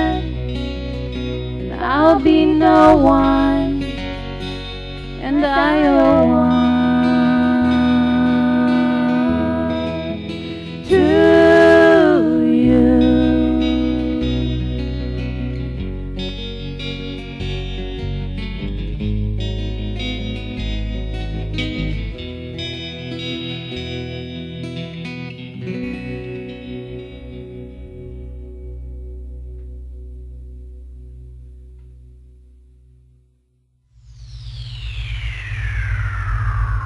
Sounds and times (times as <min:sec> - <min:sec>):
Music: 0:00.0 - 0:36.8.